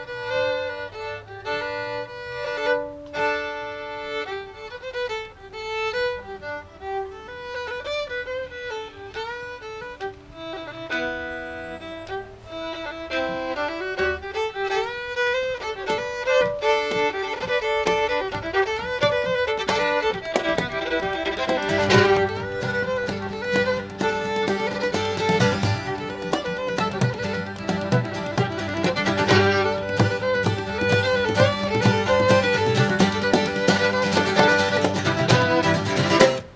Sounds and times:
Music: 0.0s - 36.5s.

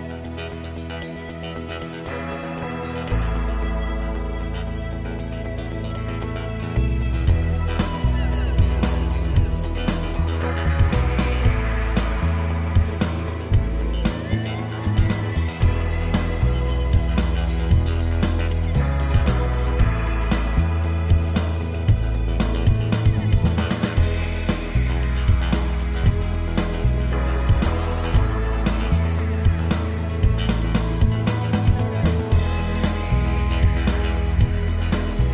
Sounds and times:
Music: 0.0s - 35.3s.

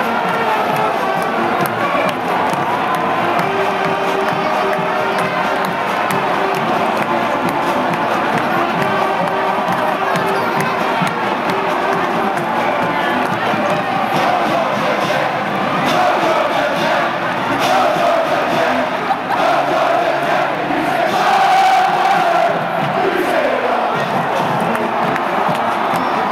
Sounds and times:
Music: 0.0s - 26.3s.

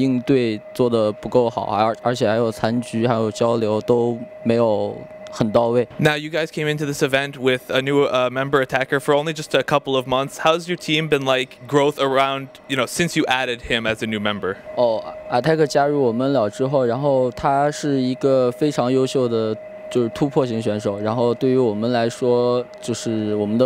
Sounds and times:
Speech: 0.0s - 23.6s.

